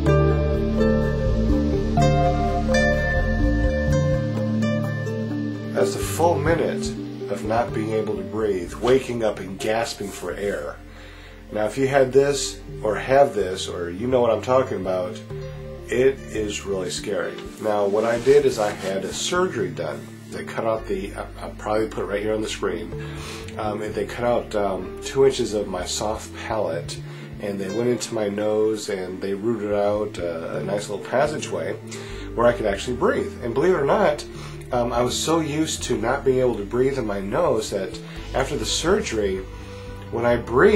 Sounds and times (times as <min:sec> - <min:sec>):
Music: 0:00.0 - 0:40.7
Speech: 0:05.8 - 0:10.8, 0:11.5 - 0:15.2, 0:15.9 - 0:31.8, 0:32.4 - 0:39.5, 0:40.1 - 0:40.7.